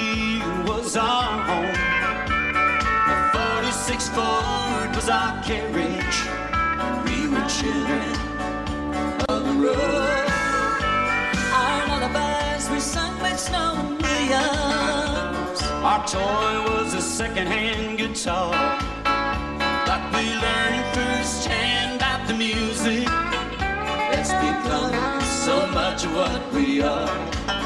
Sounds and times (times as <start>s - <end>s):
Country: 0.0s - 27.6s.